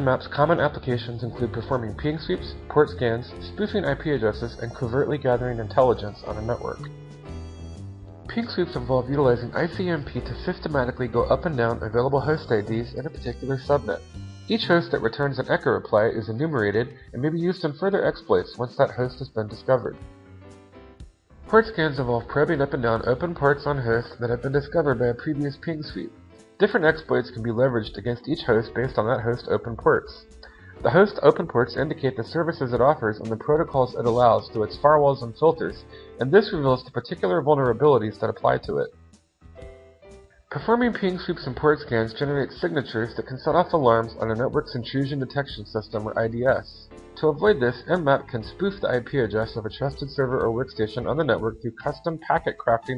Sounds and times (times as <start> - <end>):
Speech: 0.0 - 6.9, 8.3 - 20.0, 21.5 - 38.9, 40.5 - 52.9.